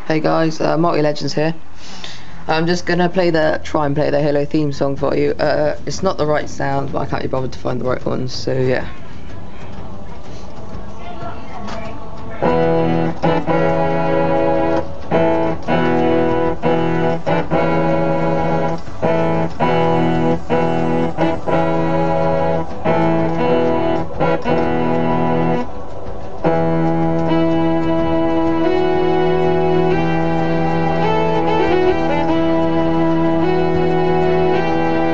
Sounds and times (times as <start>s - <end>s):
Harpsichord: 12.4s - 35.1s.